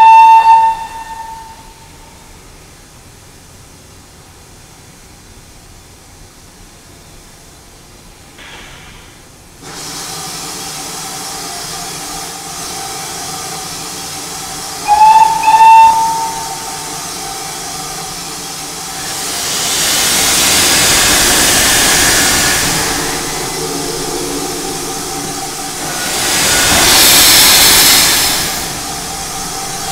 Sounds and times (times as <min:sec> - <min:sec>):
Hiss: 0:00.0 - 0:29.9.